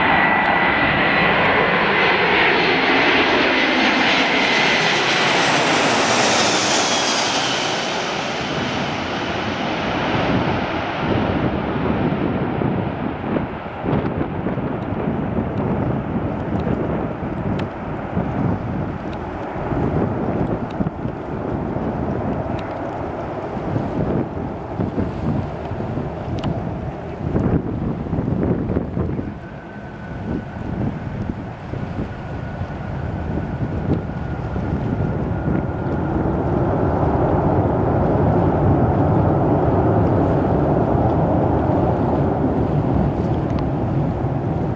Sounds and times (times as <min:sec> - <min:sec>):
Fixed-wing aircraft, airplane: 0:00.0 - 0:44.7.